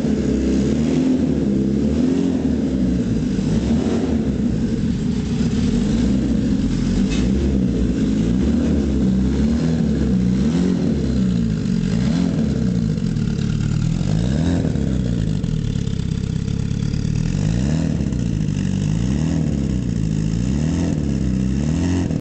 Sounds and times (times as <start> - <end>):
Accelerating, revving, vroom: 0.0 - 4.4, 7.0 - 12.9, 14.0 - 15.2, 17.3 - 22.2
Medium engine (mid frequency): 0.0 - 22.2
Vehicle: 0.0 - 22.2
Idling: 2.5 - 22.2.